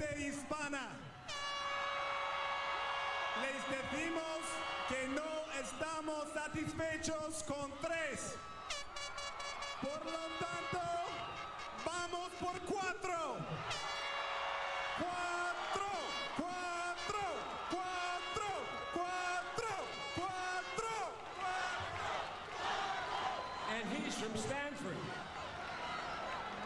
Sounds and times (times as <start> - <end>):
Male speech, man speaking: 0.0 - 1.0, 3.4 - 8.4, 9.8 - 11.2, 11.8 - 13.4, 15.0 - 21.6, 23.7 - 25.1.